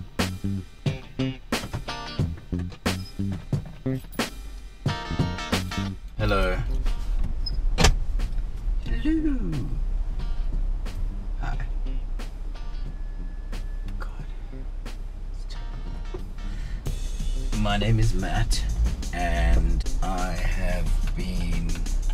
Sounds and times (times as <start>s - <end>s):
Music: 0.0s - 22.1s
Speech: 6.2s - 6.7s, 8.8s - 9.8s, 17.5s - 21.8s.